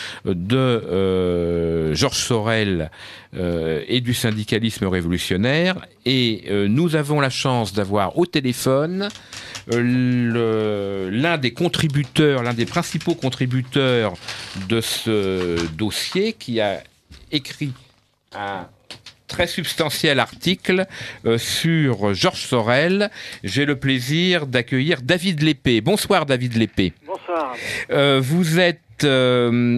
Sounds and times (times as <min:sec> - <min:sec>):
Speech: 0:00.2 - 0:18.7, 0:19.3 - 0:29.7.